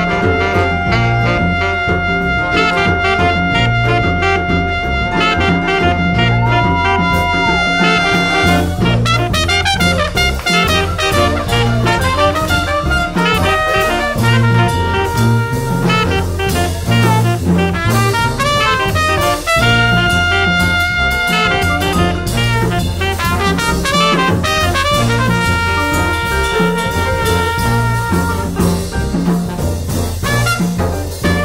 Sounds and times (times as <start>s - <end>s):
Trumpet: 0.0s - 31.4s.